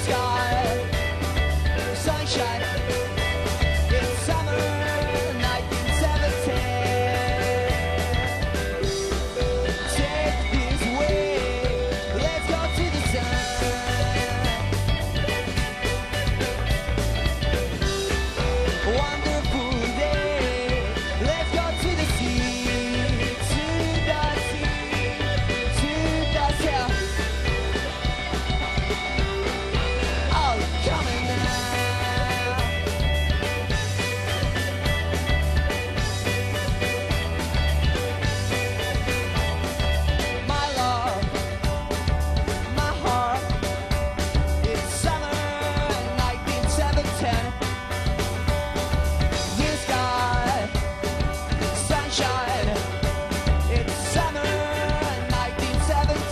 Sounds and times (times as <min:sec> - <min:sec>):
Music: 0:00.0 - 0:56.3.